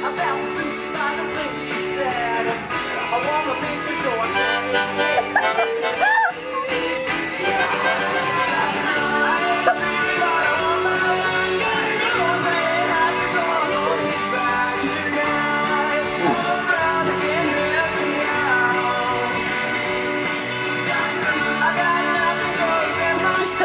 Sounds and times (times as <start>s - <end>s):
Music: 0.0s - 23.6s.